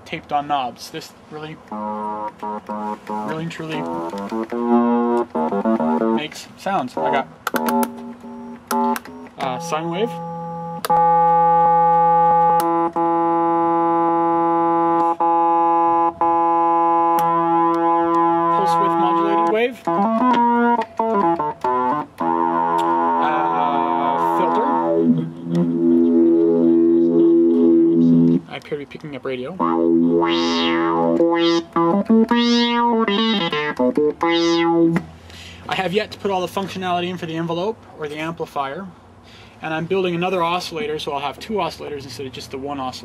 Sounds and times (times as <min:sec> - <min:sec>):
Speech: 0:00.0 - 0:01.6, 0:03.2 - 0:03.9, 0:06.2 - 0:07.3, 0:09.4 - 0:10.2, 0:18.5 - 0:19.8, 0:23.2 - 0:25.0, 0:28.5 - 0:29.6, 0:35.7 - 0:38.9, 0:39.6 - 0:43.0
Sampler: 0:01.5 - 0:28.6, 0:29.5 - 0:35.0.